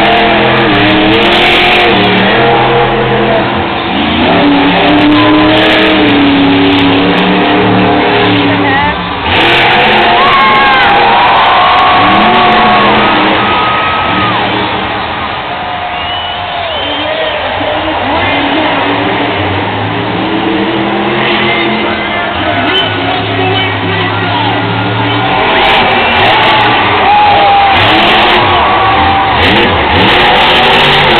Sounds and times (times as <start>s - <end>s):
Truck: 0.0s - 31.1s
Speech: 16.9s - 19.0s, 21.5s - 24.7s.